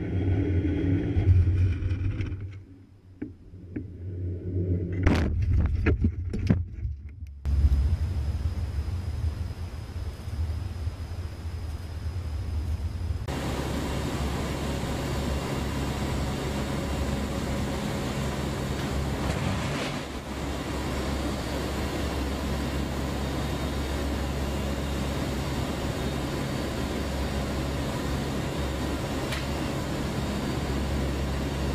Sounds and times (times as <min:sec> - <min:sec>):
Vehicle: 0:00.0 - 0:31.7.